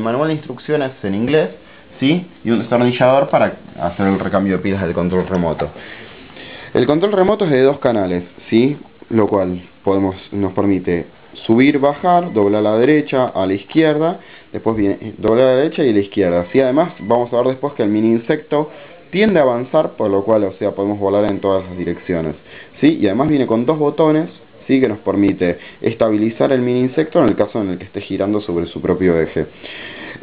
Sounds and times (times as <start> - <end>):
Speech: 0.0 - 5.8, 6.8 - 29.5.